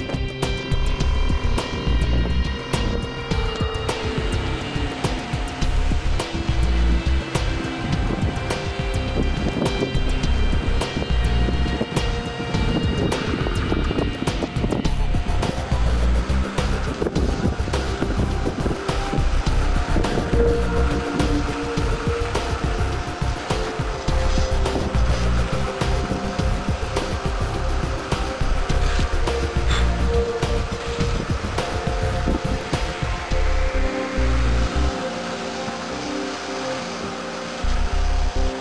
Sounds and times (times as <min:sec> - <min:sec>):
Music: 0:00.0 - 0:38.6
Spray: 0:00.0 - 0:38.6.